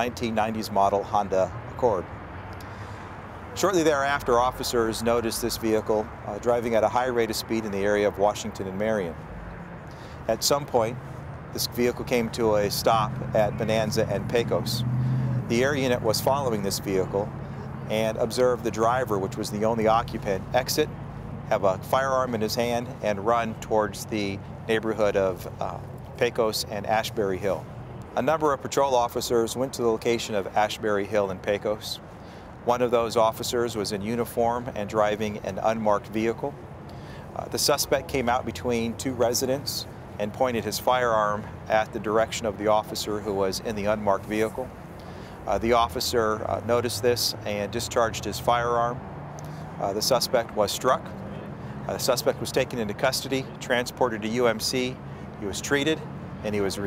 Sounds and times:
Speech: 0:00.0 - 0:02.1, 0:03.6 - 0:09.2, 0:10.2 - 0:11.0, 0:11.6 - 0:14.8, 0:15.4 - 0:20.9, 0:21.5 - 0:27.6, 0:28.2 - 0:32.0, 0:32.6 - 0:36.6, 0:37.3 - 0:44.7, 0:45.5 - 0:49.0, 0:49.8 - 0:51.2, 0:51.9 - 0:56.8
Car: 0:00.0 - 0:56.8.

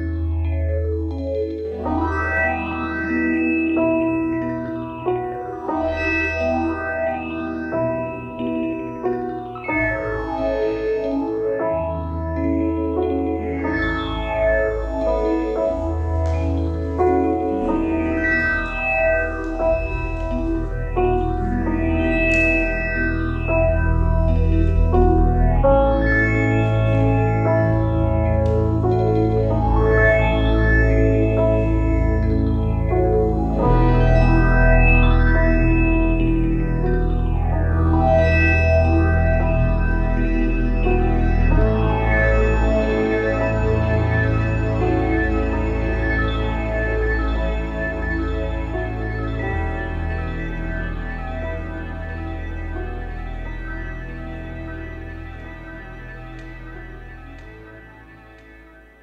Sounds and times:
Keyboard (musical): 0:00.0 - 0:59.0.

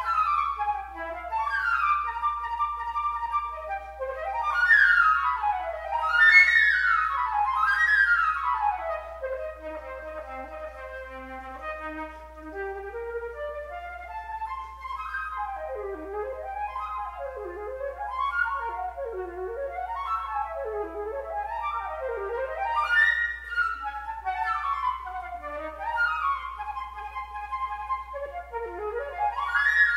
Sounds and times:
Flute: 0:00.0 - 0:29.9.

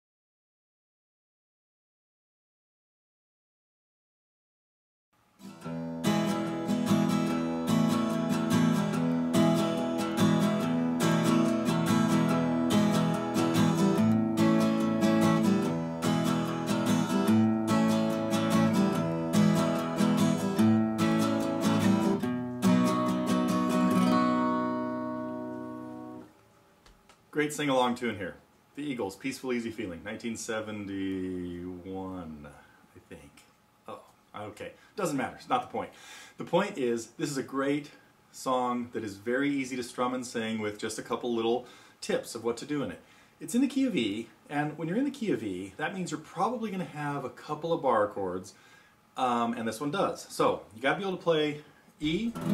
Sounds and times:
Strum: 0:05.4 - 0:26.3, 0:52.0 - 0:52.5
Acoustic guitar: 0:05.4 - 0:26.4, 0:52.0 - 0:52.5
Speech: 0:27.3 - 0:48.6, 0:49.2 - 0:52.4.

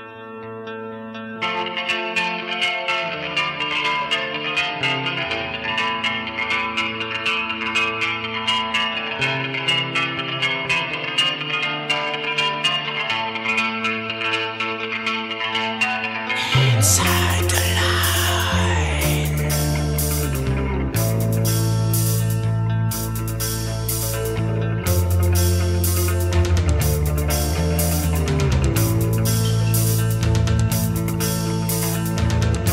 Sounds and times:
Music: 0:00.0 - 0:32.7.

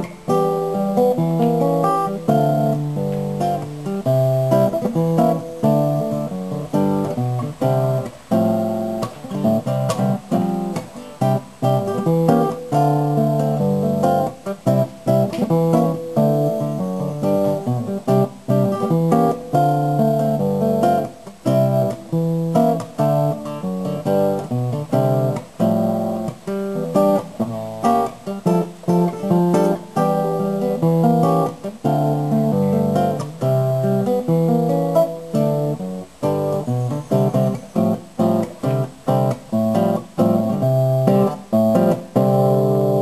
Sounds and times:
Guitar: 0:00.0 - 0:43.0.

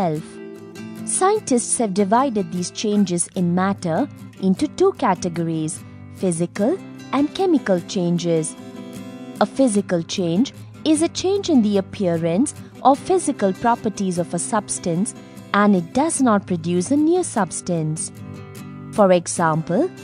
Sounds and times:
Speech: 0:00.0 - 0:00.3, 0:01.1 - 0:08.6, 0:09.4 - 0:18.1, 0:19.0 - 0:20.0
Music: 0:00.0 - 0:20.0.

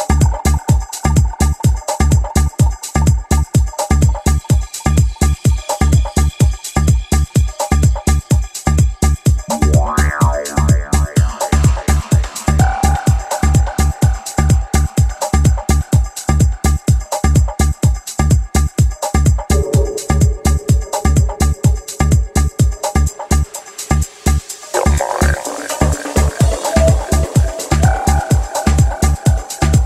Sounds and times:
Music: 0:00.0 - 0:29.8.

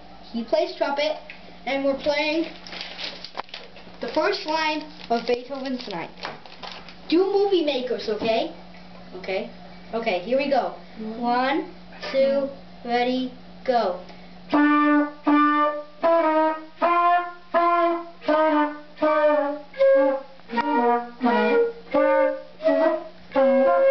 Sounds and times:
Trumpet: 0:14.5 - 0:23.9.

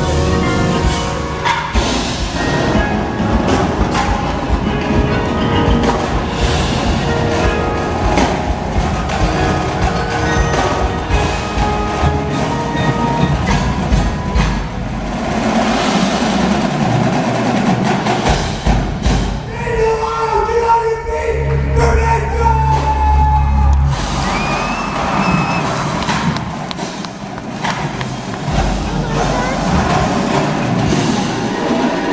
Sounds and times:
Speech: 0:19.5 - 0:23.1, 0:28.9 - 0:30.1.

